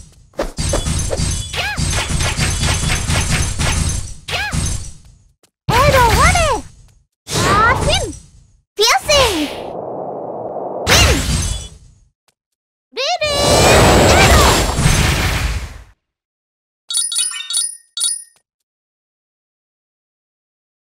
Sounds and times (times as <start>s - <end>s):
Speech: 5.7s - 6.7s, 7.4s - 8.2s, 8.8s - 9.5s, 13.0s - 14.6s.